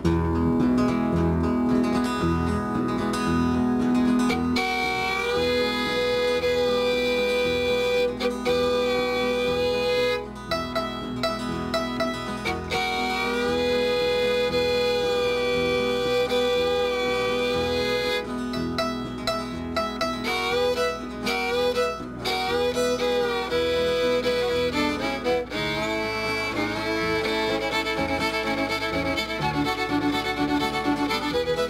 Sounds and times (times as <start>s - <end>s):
Pizzicato: 0.0s - 31.6s.